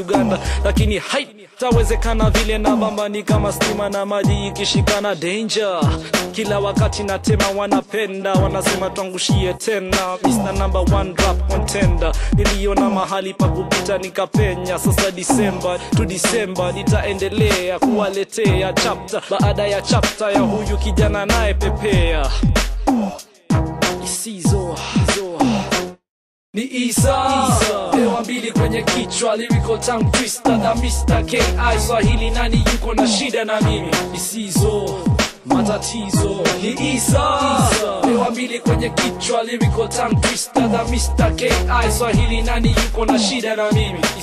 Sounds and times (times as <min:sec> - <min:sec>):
Hip hop music: 0:00.0 - 0:26.0, 0:26.6 - 0:44.2.